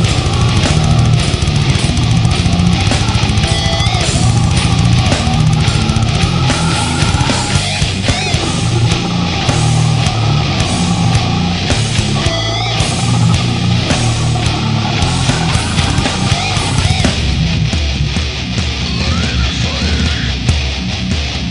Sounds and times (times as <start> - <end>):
Heavy metal: 0.0 - 21.5.